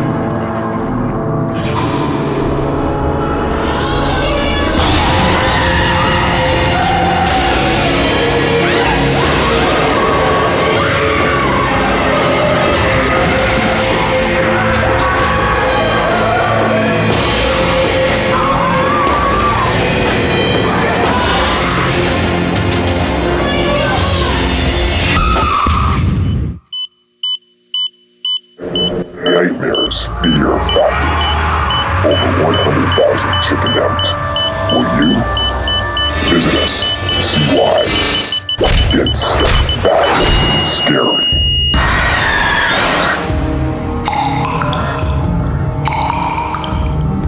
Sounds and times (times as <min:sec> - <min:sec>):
Music: 0:00.0 - 0:26.6, 0:28.6 - 0:47.2.